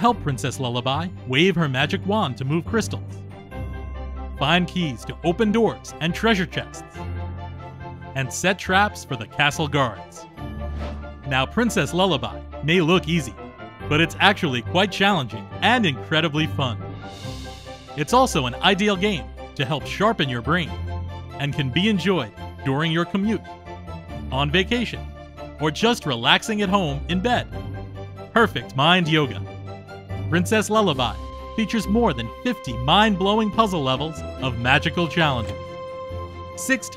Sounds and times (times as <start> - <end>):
Speech: 0.0 - 3.1, 4.4 - 6.8, 8.2 - 10.2, 11.3 - 16.8, 18.0 - 20.8, 21.4 - 23.4, 24.3 - 25.0, 25.6 - 27.5, 28.4 - 29.4, 30.3 - 35.6, 36.6 - 36.9
Music: 0.0 - 36.9.